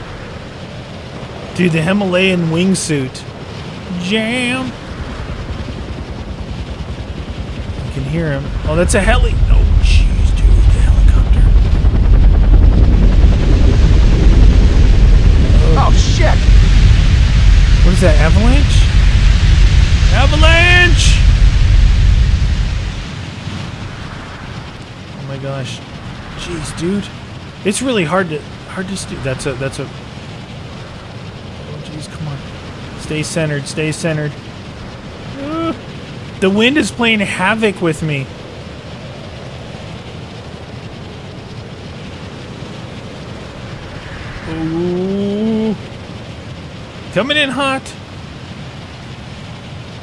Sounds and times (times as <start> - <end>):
Outside, rural or natural: 0.0 - 50.0
Speech: 1.6 - 3.3, 3.9 - 4.8, 7.9 - 11.6, 15.5 - 16.4, 17.8 - 18.9, 20.1 - 21.2, 25.2 - 25.8, 26.4 - 29.9, 31.7 - 32.4, 33.0 - 34.4, 35.4 - 35.8, 36.4 - 38.3, 44.5 - 45.8, 47.2 - 48.0.